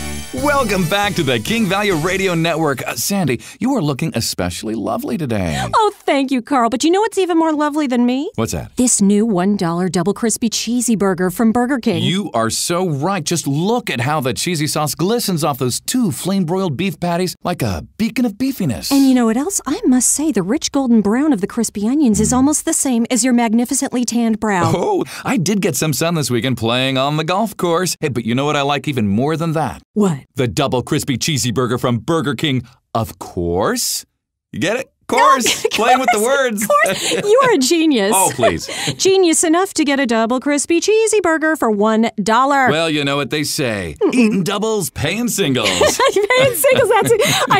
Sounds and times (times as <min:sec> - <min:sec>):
Speech: 0:00.4 - 0:34.0, 0:34.6 - 0:47.5.